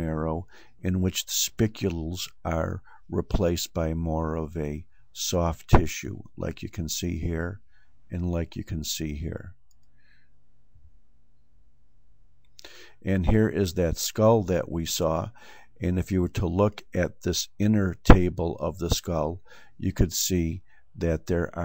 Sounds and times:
Speech: 0.0s - 9.6s, 13.0s - 21.6s
Inside, small room: 0.0s - 21.6s.

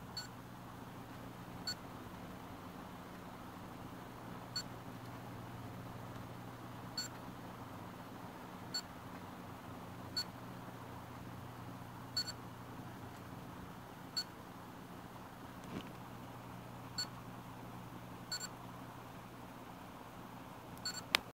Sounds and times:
White noise: 0.0s - 21.3s.

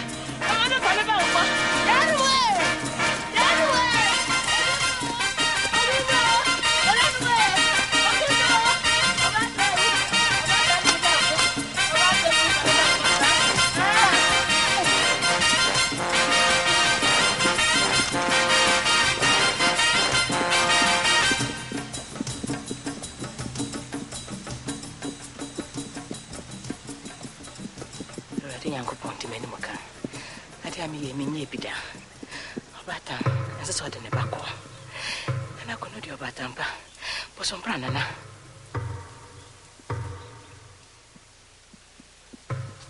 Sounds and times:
Narration, monologue: 0.0s - 42.8s.

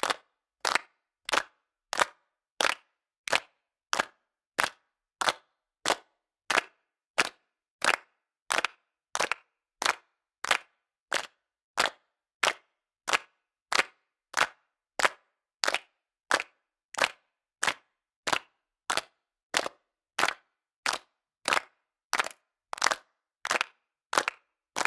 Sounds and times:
Clapping: 0.0s - 24.8s.

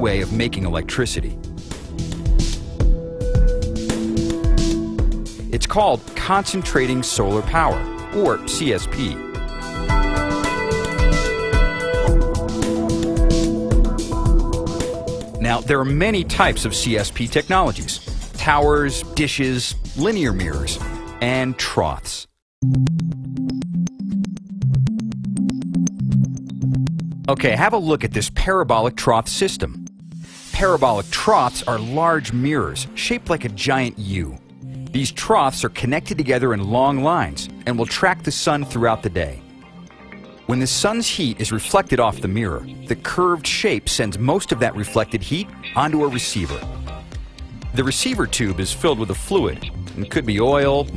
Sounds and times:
Speech: 0.0s - 1.4s, 5.5s - 9.2s, 15.4s - 22.3s, 27.3s - 29.8s, 30.6s - 39.4s, 40.5s - 46.7s, 47.8s - 50.9s
Music: 0.0s - 50.9s.

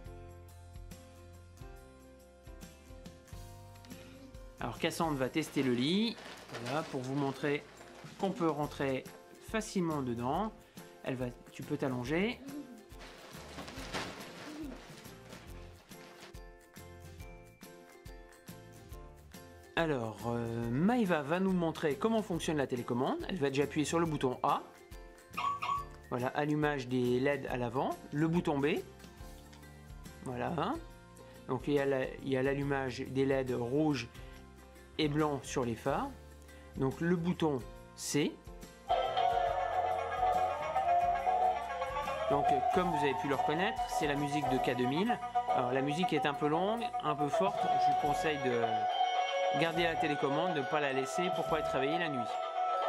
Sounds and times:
Music: 0.0s - 52.8s
Speech: 4.6s - 12.8s, 19.8s - 24.7s, 26.1s - 28.9s, 30.2s - 30.8s, 31.5s - 34.1s, 35.0s - 36.2s, 36.8s - 38.4s, 42.3s - 48.8s, 49.6s - 52.4s.

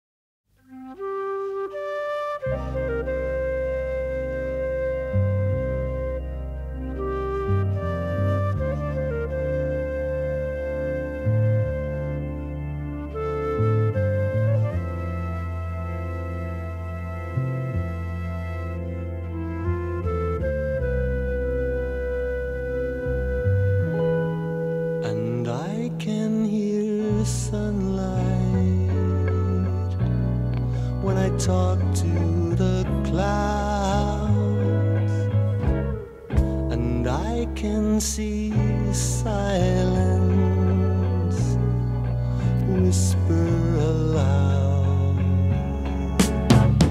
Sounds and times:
Flute: 0.6s - 46.9s.

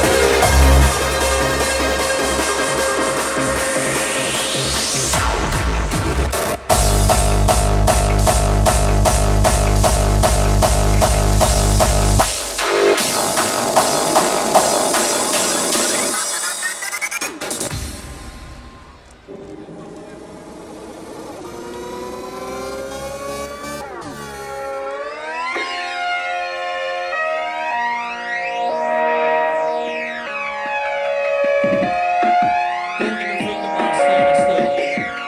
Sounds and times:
Electronic music: 0.0s - 35.2s.

